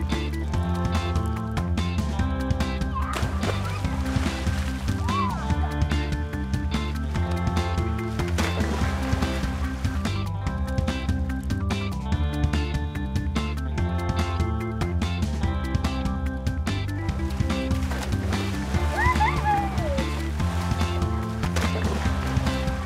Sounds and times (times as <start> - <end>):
Music: 0.0 - 22.8
Stream: 3.0 - 10.6, 17.1 - 22.8.